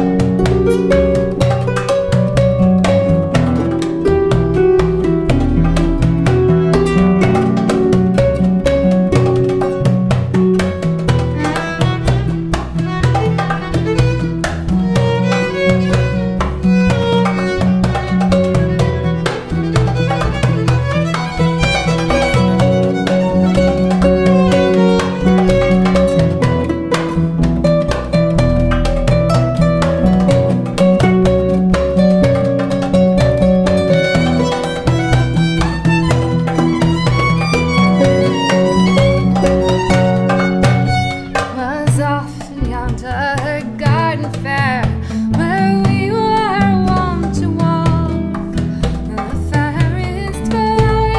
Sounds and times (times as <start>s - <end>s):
Harp: 0.0s - 43.2s
Bowed string instrument: 0.0s - 51.1s.